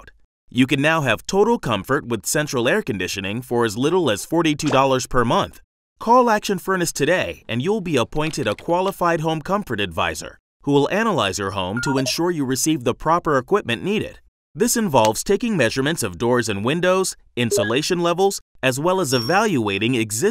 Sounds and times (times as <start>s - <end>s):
Speech: 0.0s - 20.3s.